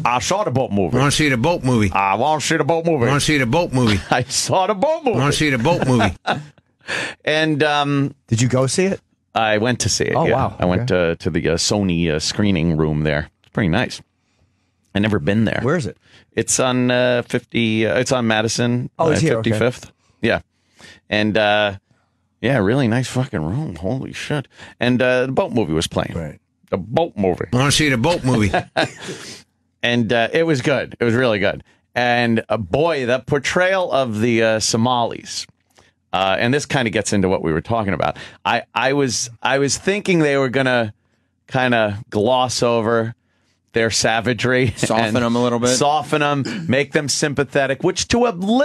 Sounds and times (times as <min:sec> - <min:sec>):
Speech: 0:00.0 - 0:14.0, 0:15.0 - 0:21.8, 0:22.4 - 0:35.5, 0:36.2 - 0:40.9, 0:41.5 - 0:43.2, 0:43.8 - 0:48.6.